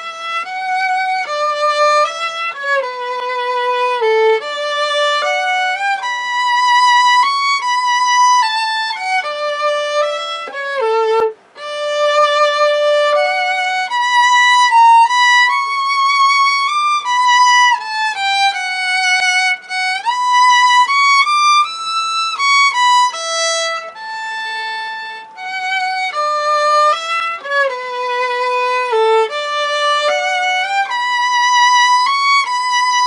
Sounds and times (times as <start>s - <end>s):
Violin, fiddle: 0.0s - 33.0s.